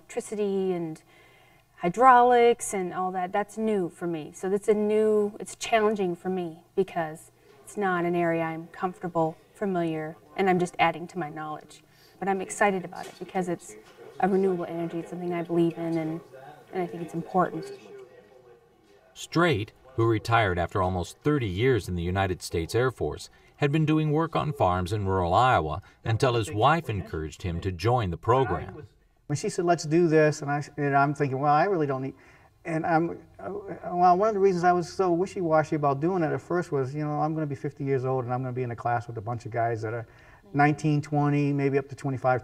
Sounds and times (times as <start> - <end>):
Speech: 12.6 - 32.1.